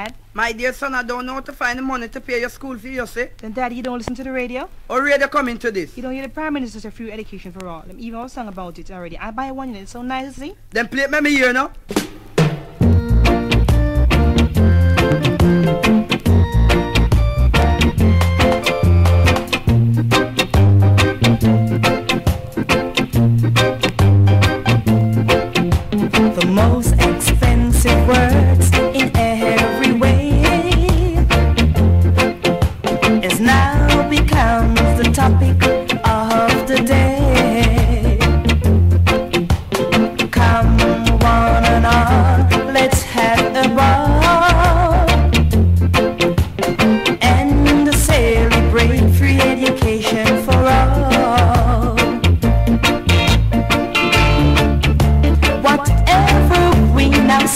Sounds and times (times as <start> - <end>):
Rhythm and blues: 11.4 - 57.5.